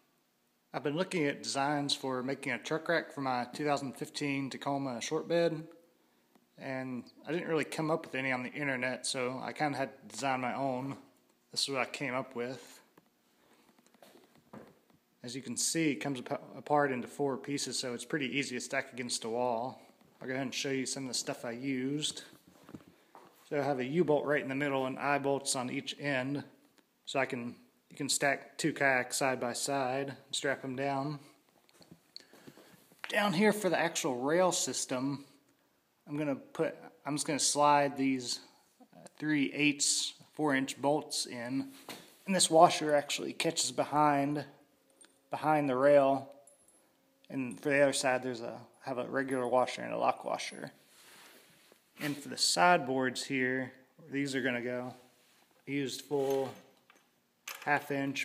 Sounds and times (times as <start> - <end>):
Speech: 0.7 - 5.7, 6.6 - 12.9, 15.2 - 22.4, 23.5 - 31.4, 33.1 - 35.4, 36.0 - 44.6, 45.3 - 46.3, 47.3 - 50.8, 52.0 - 56.6, 57.6 - 58.2.